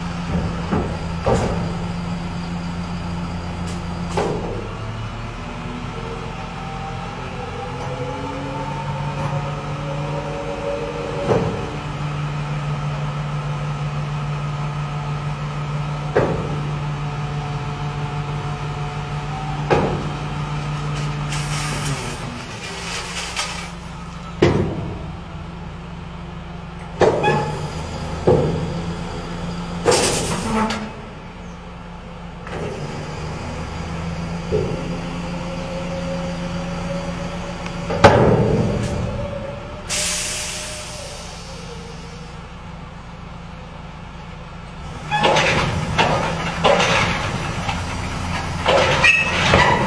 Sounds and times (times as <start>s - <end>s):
Air brake: 21.3s - 23.6s, 29.9s - 30.9s, 39.9s - 42.4s.